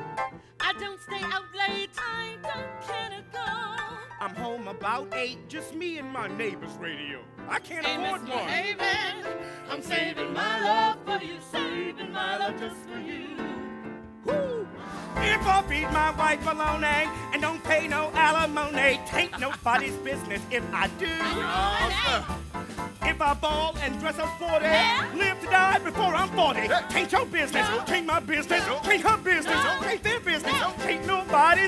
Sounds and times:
Music: 0:00.0 - 0:31.6.

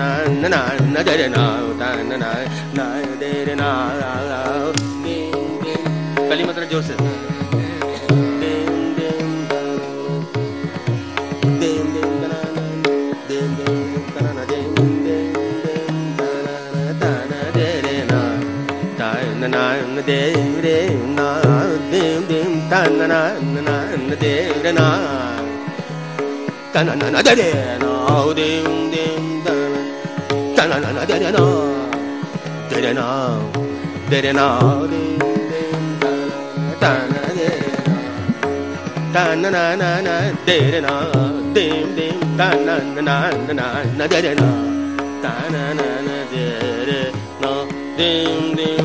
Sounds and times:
Singing: 0:00.0 - 0:10.8, 0:11.4 - 0:25.8, 0:26.7 - 0:48.8
Carnatic music: 0:00.0 - 0:48.8
Sitar: 0:00.0 - 0:48.8.

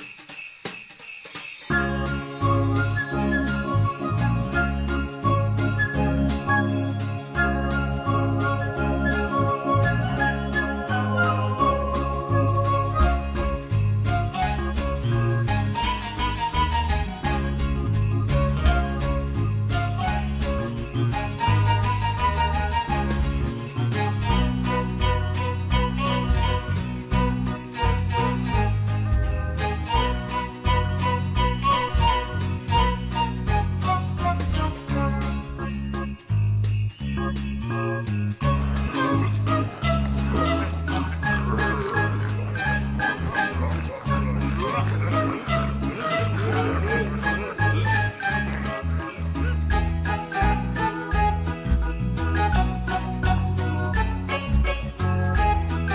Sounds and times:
Theme music: 0:01.7 - 0:20.1, 0:24.3 - 0:35.4, 0:38.4 - 0:54.8.

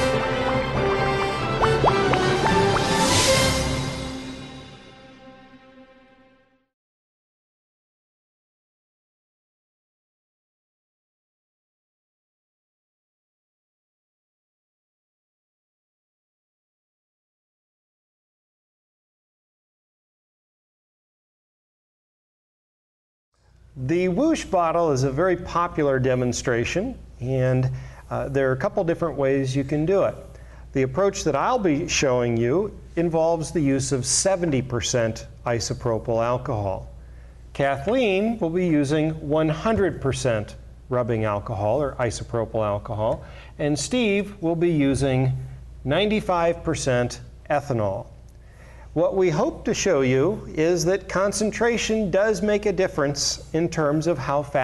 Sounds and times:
Speech: 0:23.8 - 0:36.9, 0:37.6 - 0:48.2, 0:49.0 - 0:54.6.

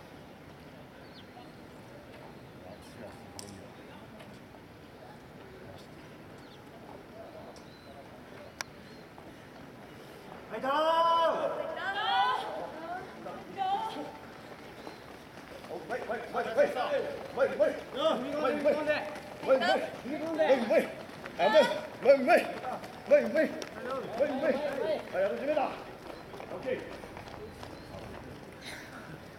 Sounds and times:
Outside, urban or manmade: 0:00.0 - 0:29.3
Run: 0:01.6 - 0:29.3.

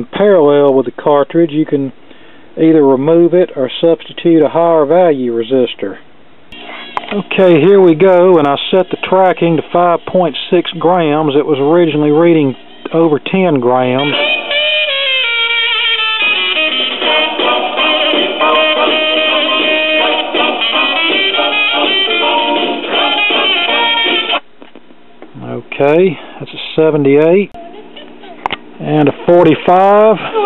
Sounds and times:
Speech: 0:00.0 - 0:02.0, 0:02.6 - 0:06.0, 0:07.1 - 0:14.1, 0:25.4 - 0:30.4
Music: 0:14.0 - 0:24.4.

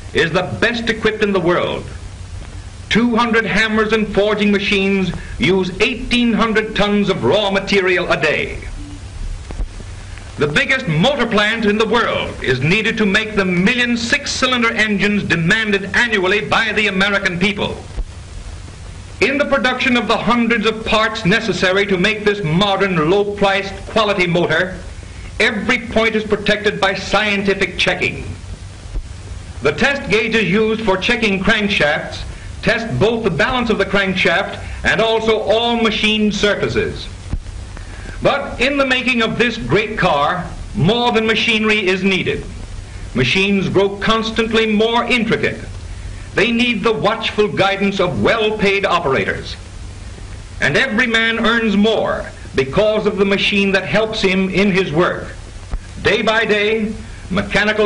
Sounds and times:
Speech: 0:00.1 - 0:02.0, 0:02.9 - 0:09.0, 0:10.4 - 0:17.9, 0:19.2 - 0:28.4, 0:29.6 - 0:37.2, 0:38.2 - 0:42.6, 0:43.2 - 0:45.8, 0:46.4 - 0:49.6, 0:50.6 - 0:55.4, 0:56.0 - 0:57.8.

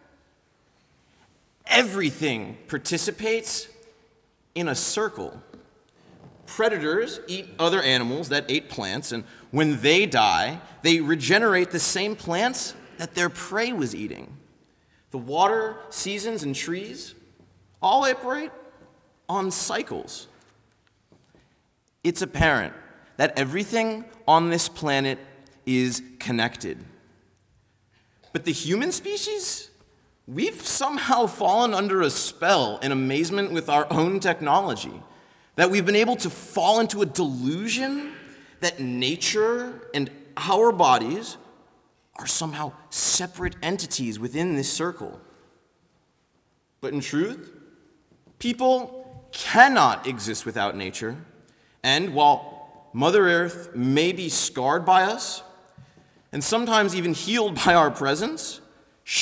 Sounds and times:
Narration, monologue: 0:00.0 - 0:59.2
Male speech, man speaking: 0:01.7 - 0:03.8, 0:04.6 - 0:05.5, 0:06.5 - 0:14.4, 0:15.2 - 0:17.2, 0:17.8 - 0:18.6, 0:19.3 - 0:20.3, 0:22.1 - 0:26.9, 0:28.3 - 0:41.4, 0:42.2 - 0:45.2, 0:46.8 - 0:47.5, 0:48.4 - 0:55.5, 0:56.4 - 0:59.2.

